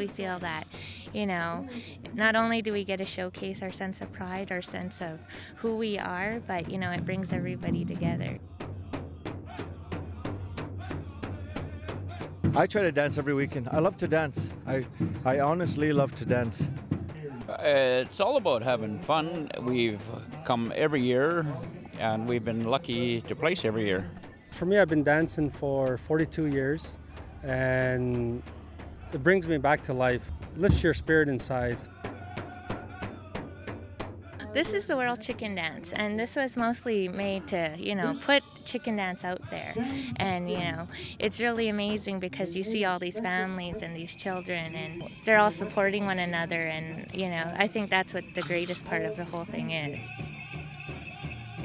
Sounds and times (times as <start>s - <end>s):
Speech: 0.0s - 8.4s, 12.6s - 16.7s, 17.4s - 26.9s, 27.5s - 28.4s, 29.2s - 31.8s, 34.4s - 50.1s
Music: 0.0s - 51.6s.